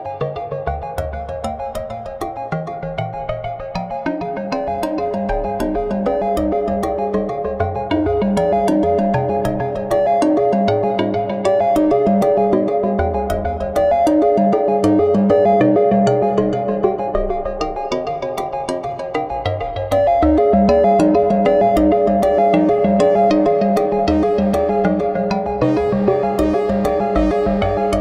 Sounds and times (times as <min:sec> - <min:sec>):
Video game music: 0:00.2 - 0:28.0.